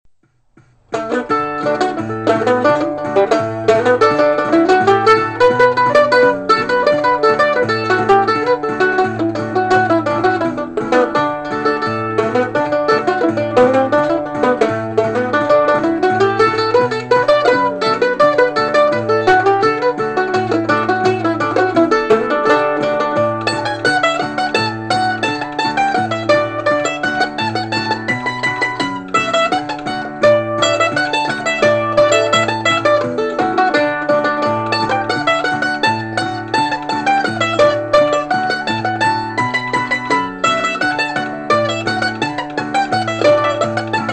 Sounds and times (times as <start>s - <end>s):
Banjo: 0.2s - 44.1s.